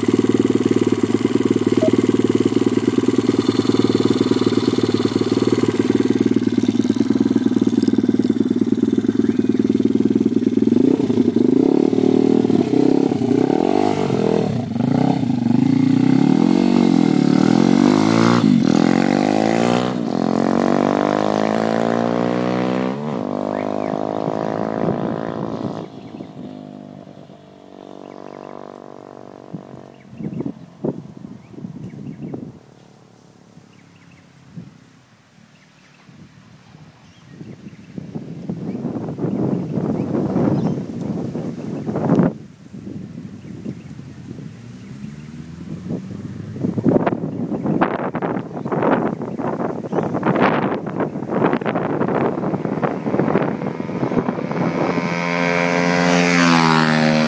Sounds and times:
Vehicle: 0.0s - 57.2s
Accelerating, revving, vroom: 10.8s - 25.9s, 44.6s - 47.0s, 52.1s - 57.2s.

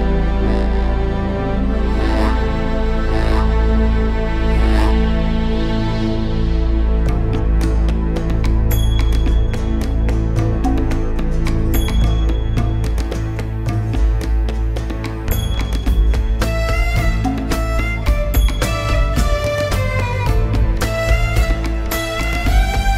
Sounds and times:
Music: 0.0s - 22.9s.

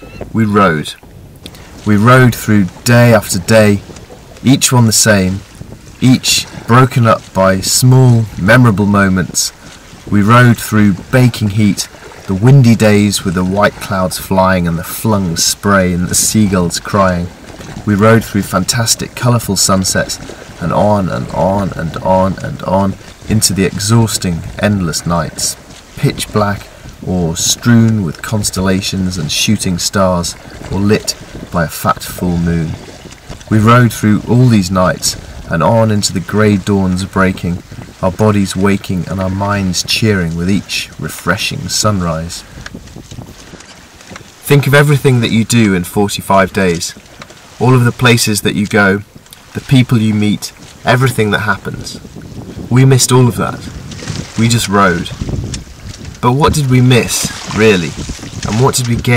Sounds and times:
Ocean: 0.0s - 59.1s
Rowboat, canoe, kayak: 0.0s - 59.1s
Speech: 0.1s - 1.0s, 1.8s - 5.4s, 6.0s - 32.8s, 33.5s - 42.4s, 44.4s - 47.0s, 47.6s - 52.0s, 52.7s - 55.2s, 56.2s - 59.1s.

